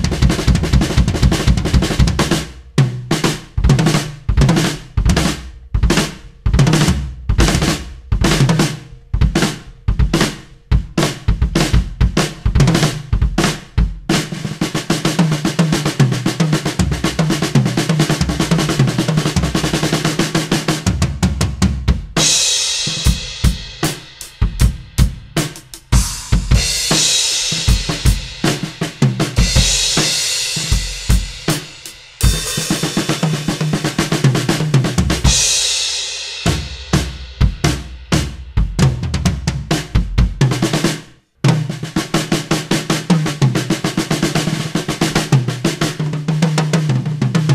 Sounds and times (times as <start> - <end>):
Bass drum: 0.0 - 14.4, 15.1 - 40.9
Drum kit: 0.0 - 47.5
Snare drum: 0.0 - 47.5.